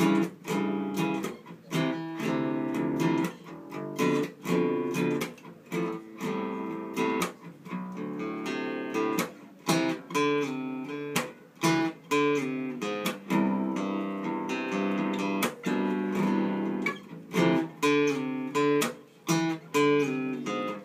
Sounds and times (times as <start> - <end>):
Acoustic guitar: 0.0 - 20.8.